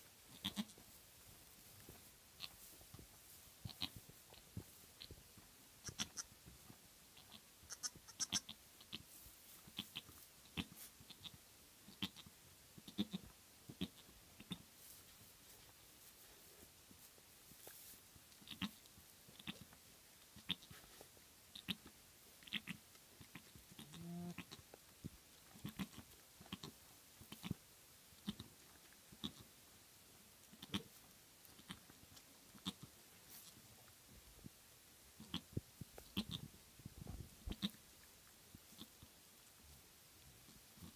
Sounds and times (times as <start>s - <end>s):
Bleat: 0.3s - 0.8s, 3.7s - 4.0s, 5.8s - 6.3s, 7.2s - 9.0s, 9.8s - 12.3s, 12.9s - 14.6s, 18.5s - 18.8s, 21.5s - 24.6s, 25.6s - 26.7s, 29.2s - 29.4s, 32.6s - 32.9s, 36.2s - 36.4s, 37.5s - 37.8s.